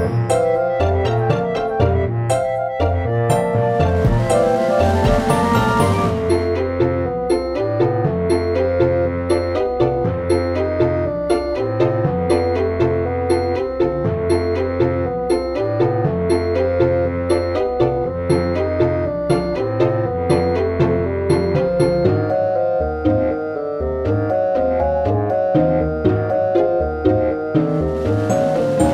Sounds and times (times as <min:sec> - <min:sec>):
Music: 0:00.0 - 0:28.9.